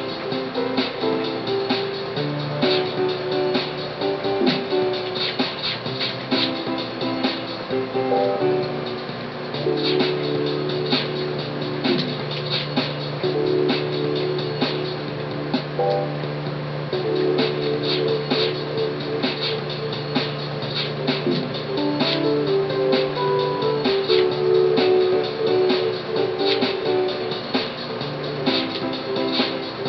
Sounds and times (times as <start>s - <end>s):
Music: 0.0s - 29.8s.